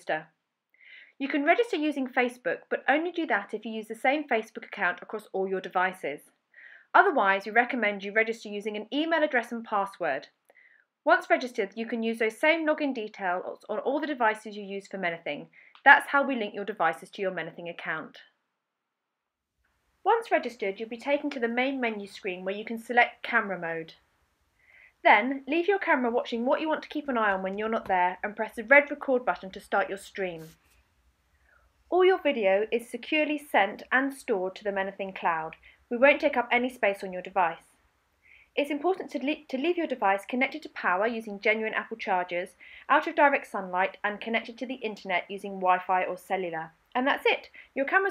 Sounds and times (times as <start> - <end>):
Speech: 0.0 - 0.4, 1.2 - 6.3, 7.0 - 10.4, 11.1 - 18.3, 20.1 - 24.0, 25.0 - 30.6, 31.9 - 37.7, 38.6 - 48.1.